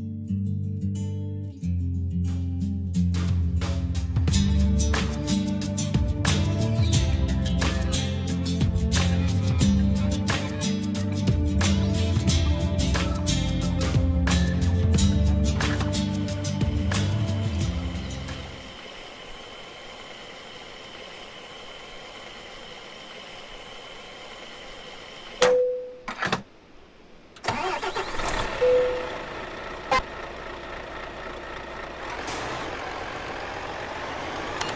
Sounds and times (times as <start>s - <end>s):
Music: 0.0s - 18.7s
Bus: 3.2s - 26.4s, 27.3s - 34.7s.